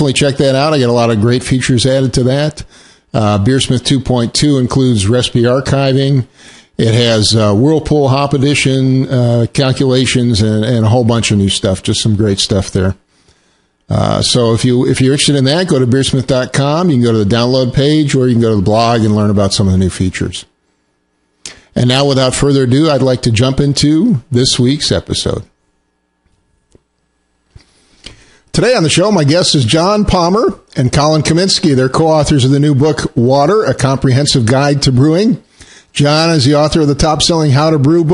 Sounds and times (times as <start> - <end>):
Speech: 0.0 - 13.0, 13.9 - 20.5, 21.7 - 25.6, 28.5 - 38.1.